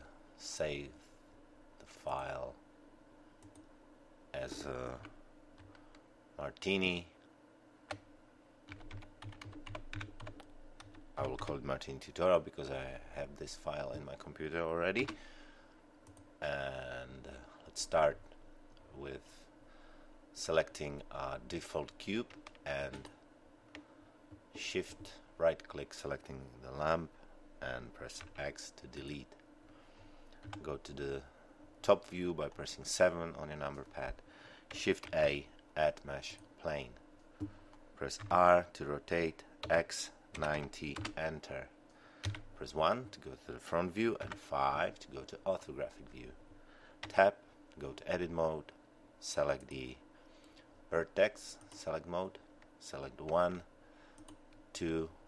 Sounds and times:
Speech: 0:00.0 - 0:01.0, 0:01.8 - 0:02.6, 0:04.4 - 0:05.1, 0:06.4 - 0:07.2, 0:11.2 - 0:15.2, 0:16.4 - 0:18.2, 0:18.9 - 0:19.4, 0:20.4 - 0:23.2, 0:24.6 - 0:29.4, 0:30.6 - 0:34.2, 0:34.8 - 0:37.0, 0:38.0 - 0:41.7, 0:42.6 - 0:46.4, 0:47.1 - 0:50.0, 0:50.9 - 0:53.7, 0:54.8 - 0:55.2.

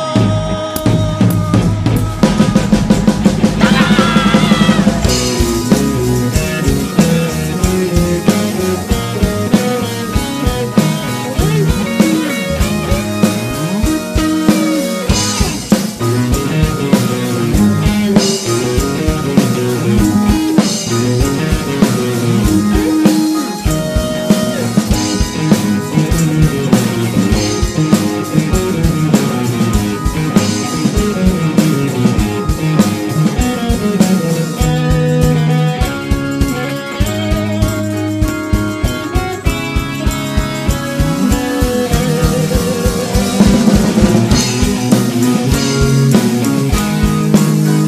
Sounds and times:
Rock music: 0:00.0 - 0:47.8.

